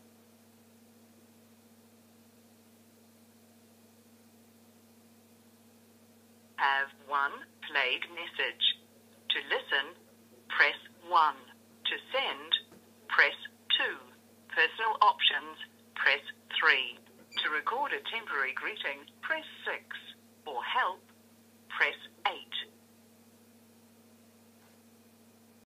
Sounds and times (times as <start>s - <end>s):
Speech: 6.6s - 21.0s, 21.7s - 22.7s.